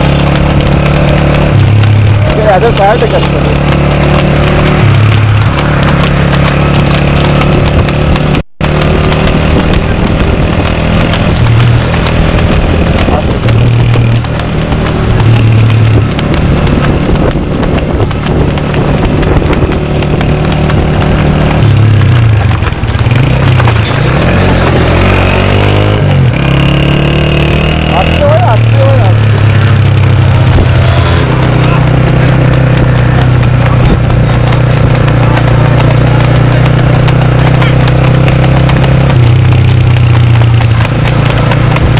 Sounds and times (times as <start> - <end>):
Clip-clop: 0.0 - 41.9.